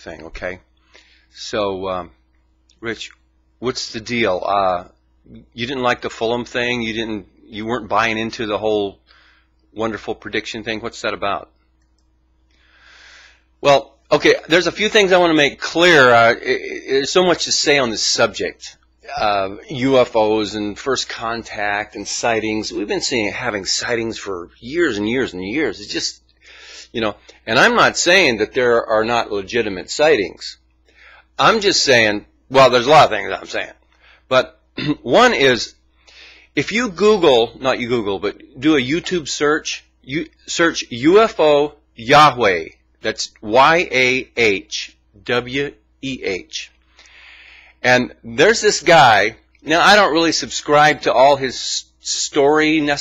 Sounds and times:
Speech: 0:00.0 - 0:00.7, 0:01.4 - 0:02.2, 0:02.8 - 0:09.0, 0:09.8 - 0:11.5, 0:13.6 - 0:26.2, 0:26.9 - 0:30.6, 0:31.4 - 0:35.8, 0:36.6 - 0:46.8, 0:47.8 - 0:53.0.

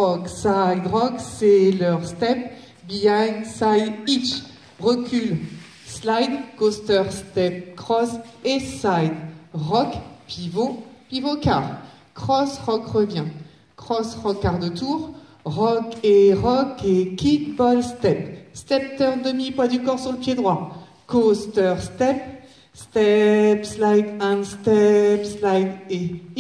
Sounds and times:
Speech: 0:00.0 - 0:26.4.

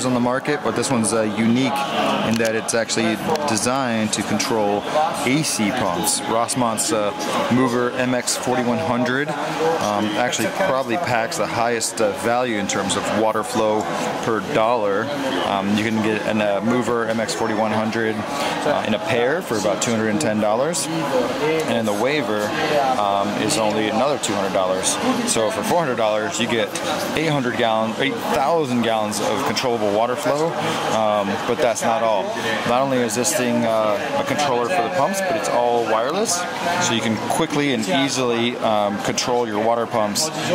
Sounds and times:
Speech: 0:00.0 - 0:40.5.

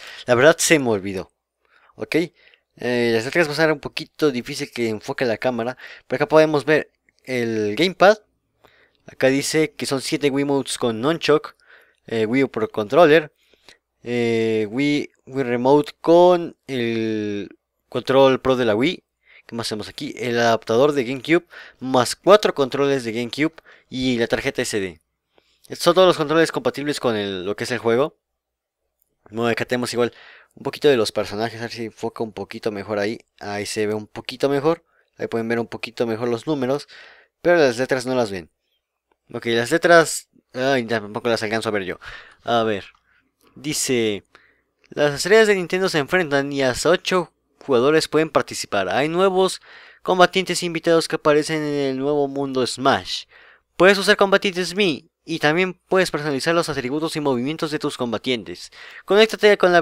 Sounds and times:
Speech: 0:00.2 - 0:01.3, 0:02.0 - 0:08.3, 0:09.1 - 0:13.4, 0:14.0 - 0:25.0, 0:25.7 - 0:28.2, 0:29.3 - 0:38.5, 0:39.3 - 0:43.0, 0:43.6 - 0:44.3, 0:44.9 - 0:59.8.

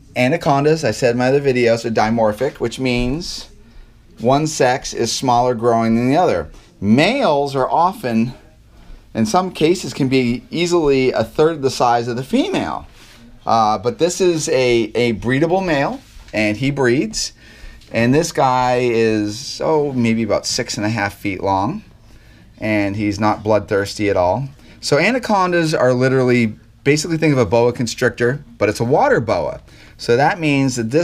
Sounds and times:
Speech: 0:00.0 - 0:21.9, 0:22.6 - 0:31.0
Inside, small room: 0:00.0 - 0:31.0.

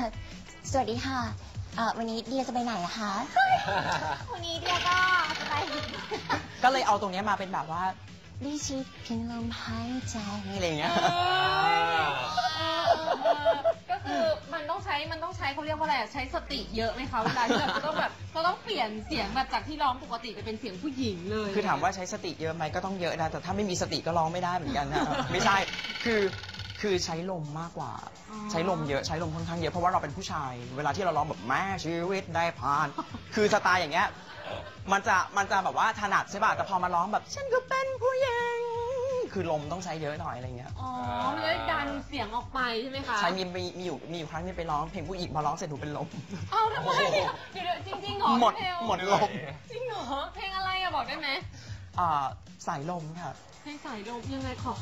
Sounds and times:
Music: 0:00.0 - 0:54.8.

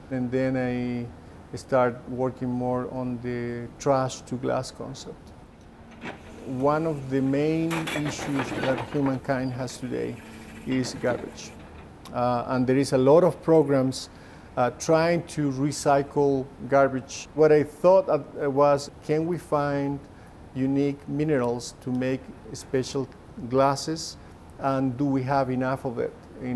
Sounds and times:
Speech: 0:00.0 - 0:05.2, 0:06.5 - 0:26.5.

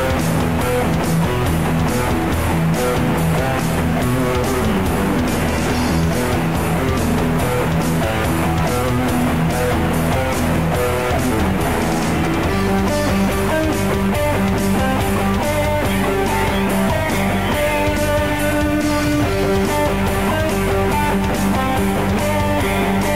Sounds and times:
Bass guitar: 0:00.0 - 0:23.1
Electric guitar: 0:00.0 - 0:23.1
Strum: 0:00.0 - 0:23.1.

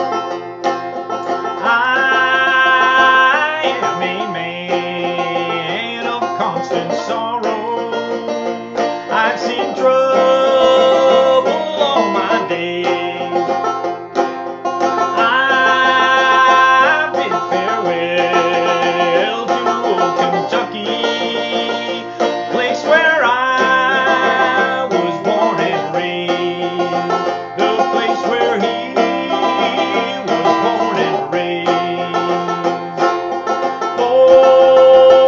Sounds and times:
Banjo: 0:00.0 - 0:35.2.

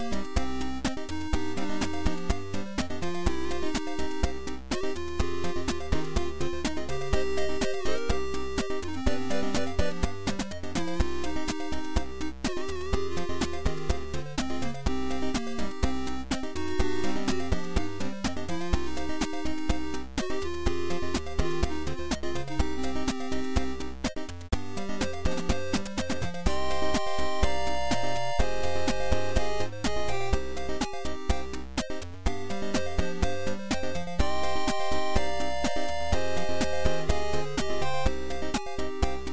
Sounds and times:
Music: 0:00.0 - 0:39.3.

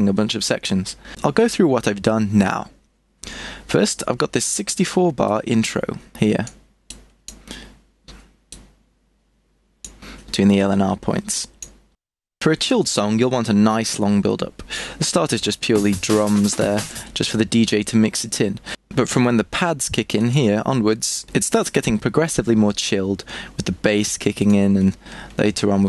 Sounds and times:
Speech: 0:00.0 - 0:02.8, 0:03.7 - 0:06.6, 0:10.3 - 0:11.6, 0:12.4 - 0:25.8.

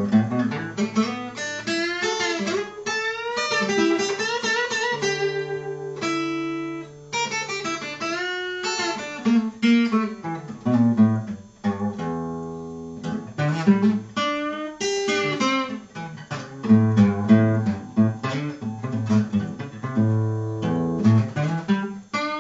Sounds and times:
Acoustic guitar: 0:00.0 - 0:22.4
Strum: 0:00.0 - 0:22.4.

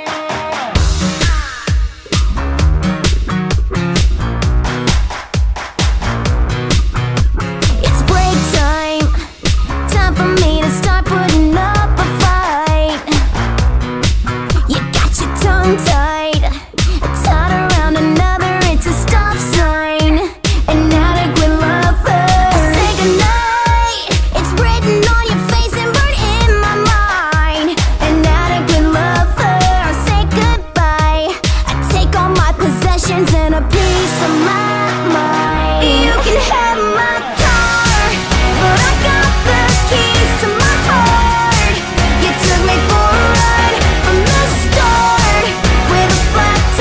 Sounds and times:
Music: 0:00.0 - 0:46.8.

